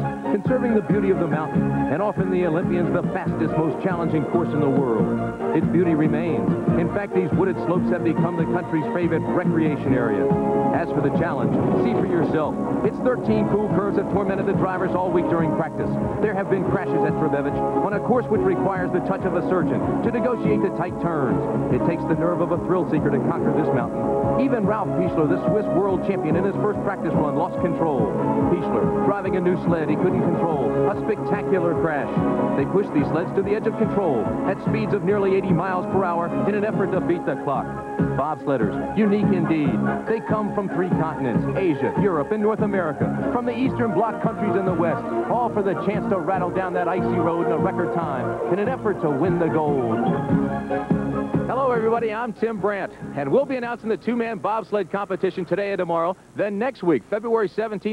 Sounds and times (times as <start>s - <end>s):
Music: 0.0s - 57.9s
Speech: 0.3s - 50.1s, 51.5s - 57.9s.